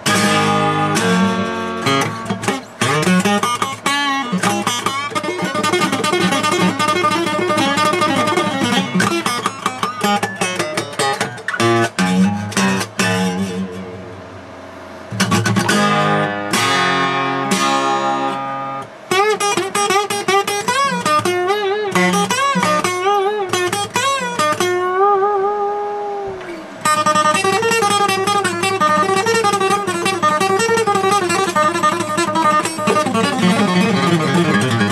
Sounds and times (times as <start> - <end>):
Music: 0.0 - 14.4, 15.0 - 34.9.